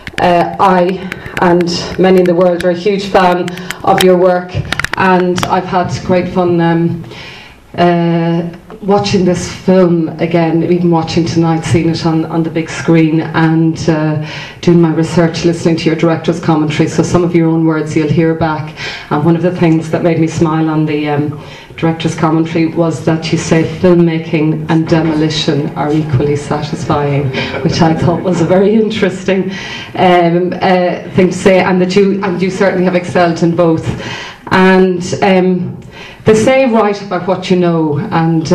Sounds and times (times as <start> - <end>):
Speech: 0.2 - 7.0, 7.8 - 33.9, 34.5 - 35.7, 36.3 - 38.5.